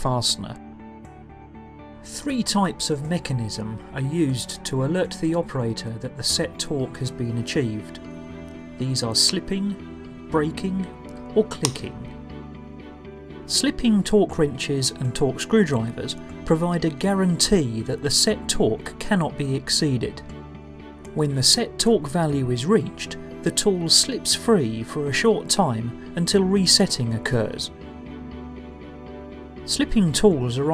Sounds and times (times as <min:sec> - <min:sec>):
Speech: 0:00.0 - 0:00.6, 0:02.1 - 0:08.0, 0:08.8 - 0:12.1, 0:13.5 - 0:20.2, 0:21.2 - 0:27.7, 0:29.7 - 0:30.7
Music: 0:00.0 - 0:30.7.